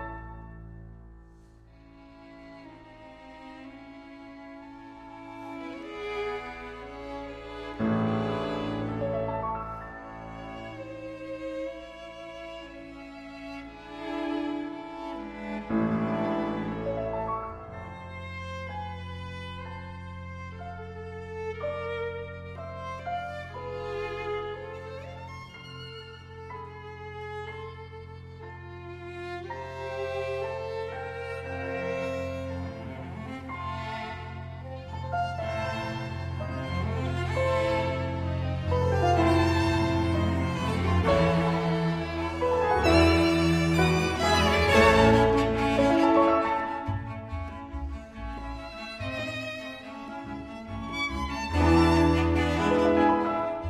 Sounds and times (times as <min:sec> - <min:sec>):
Violin, fiddle: 0:00.0 - 0:00.8, 0:01.4 - 0:53.6
Piano: 0:00.0 - 0:53.6.